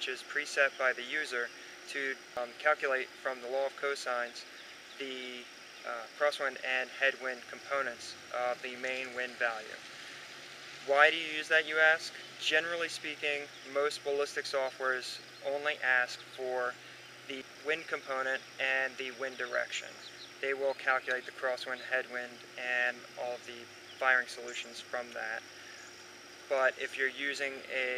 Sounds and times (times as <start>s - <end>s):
Speech: 0.0s - 9.8s, 10.9s - 25.4s, 26.5s - 27.9s.